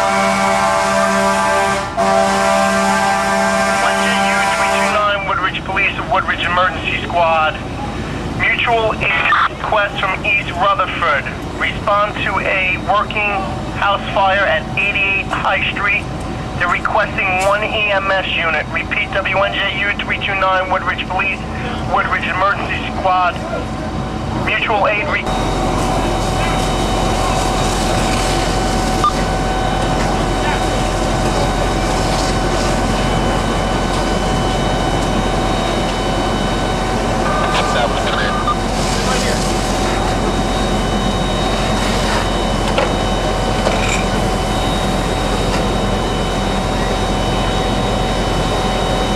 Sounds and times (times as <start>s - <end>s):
Speech: 3.8s - 25.3s, 25.9s - 28.4s, 30.0s - 31.6s, 37.3s - 40.6s.